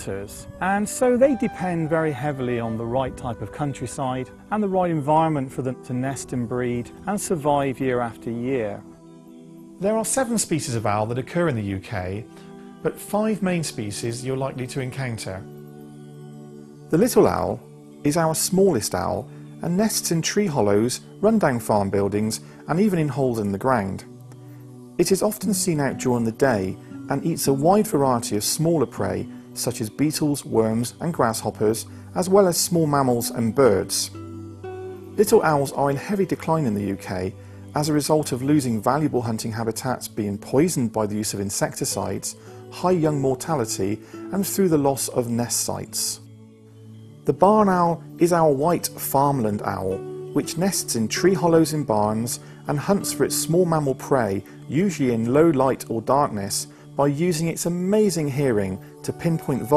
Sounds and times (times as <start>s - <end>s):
Speech: 0.0s - 8.8s, 9.8s - 15.5s, 16.9s - 24.1s, 25.0s - 34.2s, 35.2s - 46.2s, 47.3s - 59.7s
Music: 0.0s - 59.7s.